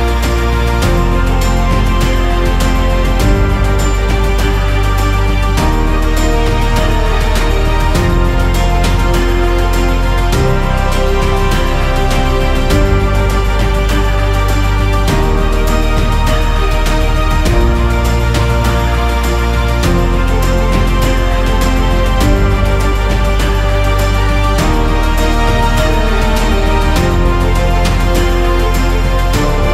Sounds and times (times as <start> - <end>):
Music: 0.0 - 29.7.